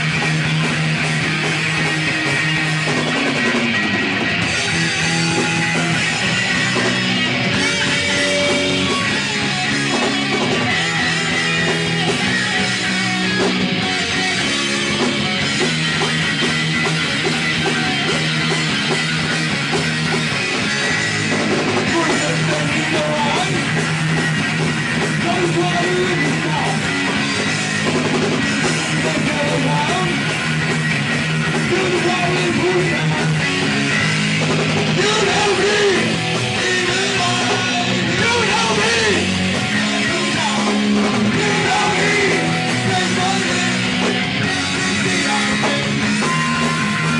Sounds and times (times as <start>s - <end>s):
Inside, large room or hall: 0.0s - 47.1s
Music: 0.0s - 47.1s.